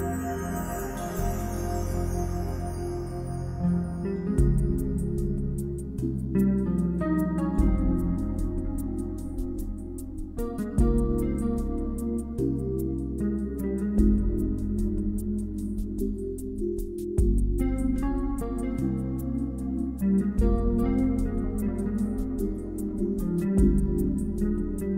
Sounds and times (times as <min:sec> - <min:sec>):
Music: 0:00.0 - 0:24.9.